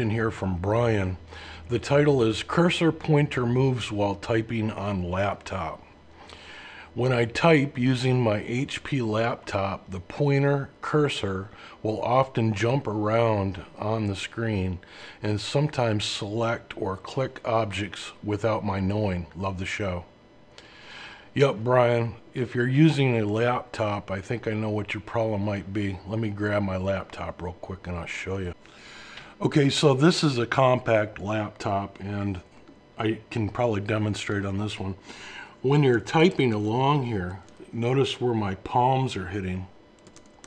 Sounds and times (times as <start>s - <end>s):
Speech: 0.0s - 5.9s, 7.0s - 20.1s, 21.4s - 28.6s, 29.4s - 35.0s, 35.6s - 39.8s.